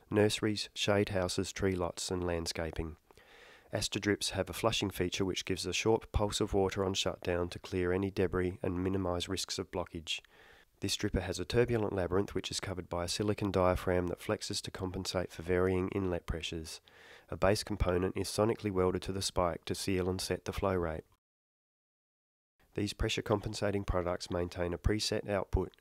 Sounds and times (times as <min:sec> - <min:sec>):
Speech: 0:00.0 - 0:03.0, 0:03.7 - 0:21.2, 0:22.8 - 0:25.8.